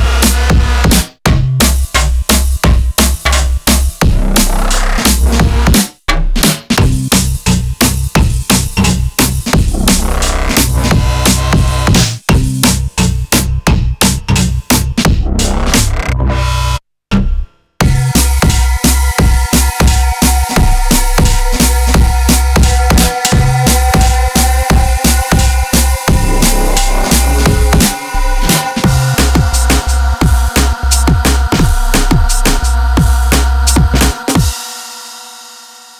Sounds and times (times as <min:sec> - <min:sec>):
Drum and bass: 0:00.0 - 0:35.2.